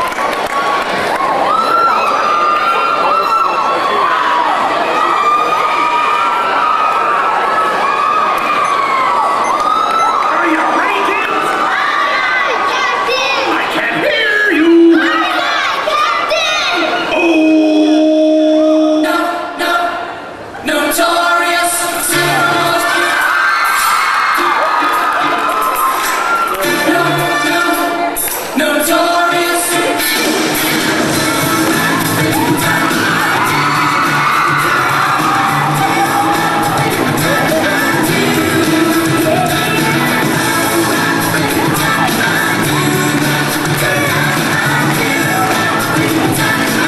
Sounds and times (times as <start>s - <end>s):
Cheering: 0.0s - 17.9s, 22.2s - 28.4s, 31.3s - 46.8s
Shout: 0.7s - 18.9s, 22.8s - 28.0s, 31.9s - 36.9s
Music: 21.0s - 46.8s.